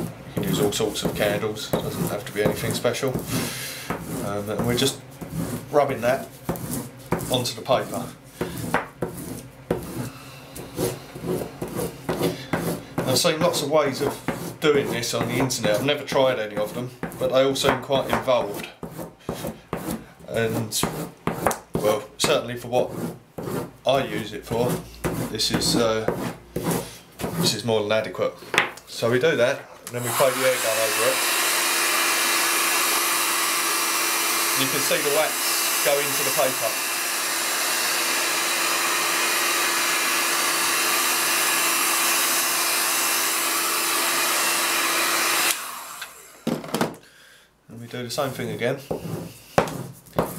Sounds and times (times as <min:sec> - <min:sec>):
Speech: 0:00.4 - 0:03.2, 0:04.2 - 0:05.0, 0:05.7 - 0:06.3, 0:07.2 - 0:08.2, 0:13.0 - 0:18.8, 0:20.3 - 0:21.0, 0:21.8 - 0:23.0, 0:23.9 - 0:26.2, 0:27.4 - 0:31.2, 0:34.6 - 0:36.8, 0:47.7 - 0:48.9.